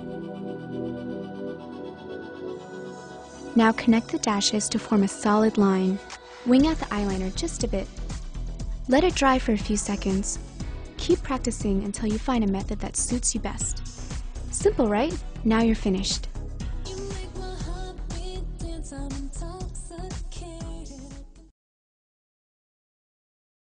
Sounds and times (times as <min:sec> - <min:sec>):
Music: 0:00.0 - 0:21.6
Speech: 0:03.6 - 0:07.9, 0:08.9 - 0:10.4, 0:11.0 - 0:13.8, 0:14.5 - 0:16.3.